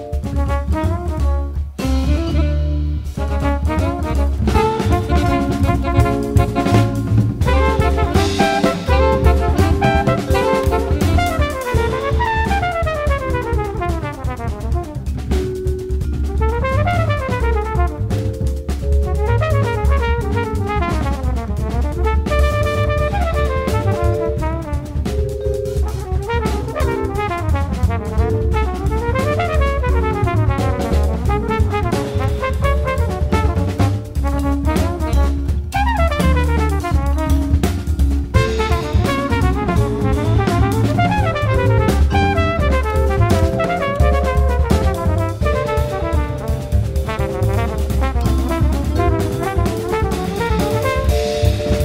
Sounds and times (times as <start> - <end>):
Trombone: 0.0 - 51.8.